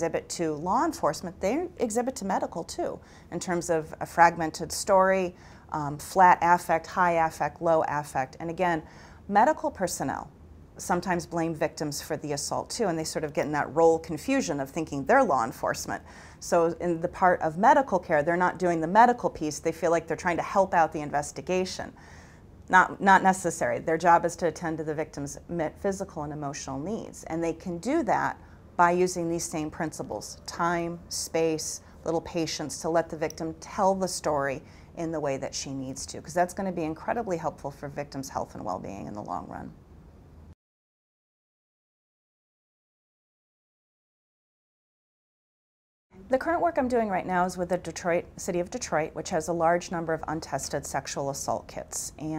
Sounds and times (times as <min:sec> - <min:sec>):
Speech: 0:00.0 - 0:22.0, 0:22.7 - 0:39.8, 0:46.2 - 0:52.3.